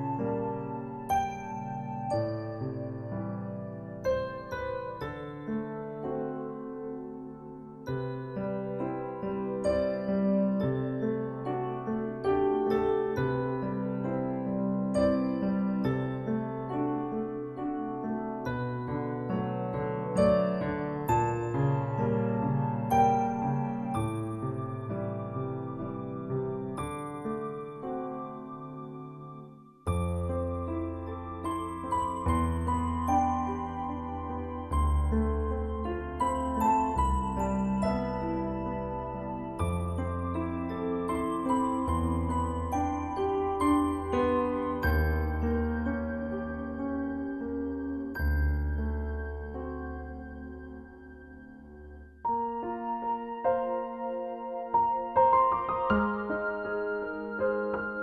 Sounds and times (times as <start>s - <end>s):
Music: 0.0s - 58.0s.